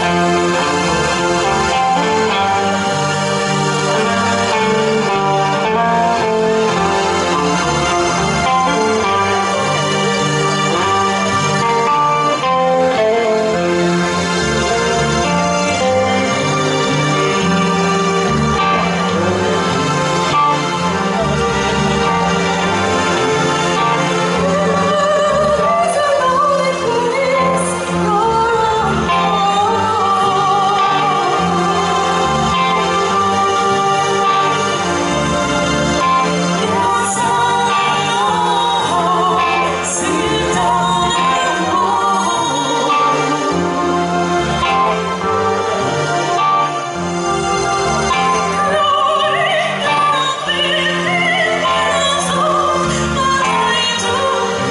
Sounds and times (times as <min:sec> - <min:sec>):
Opera: 0:00.0 - 0:54.7.